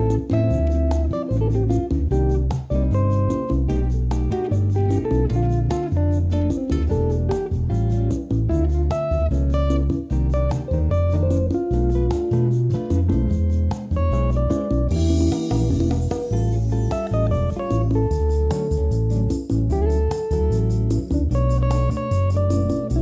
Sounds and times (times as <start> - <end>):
Music: 0.0 - 23.0.